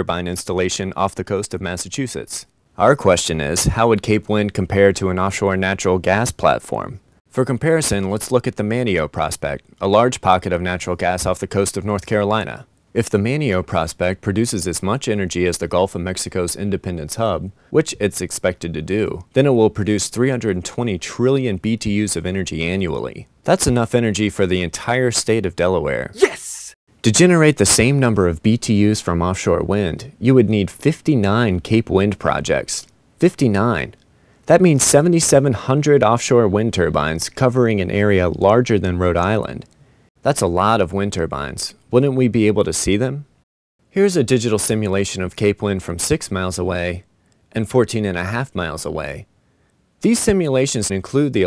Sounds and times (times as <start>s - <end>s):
Speech: 0.0s - 43.3s, 43.9s - 49.3s, 50.0s - 51.4s.